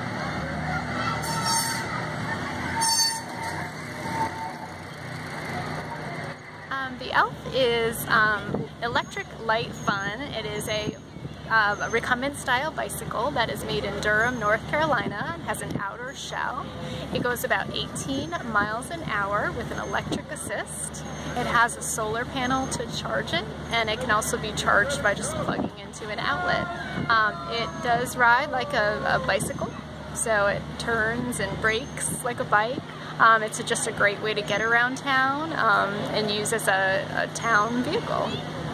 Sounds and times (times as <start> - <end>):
Speech: 6.7 - 38.4.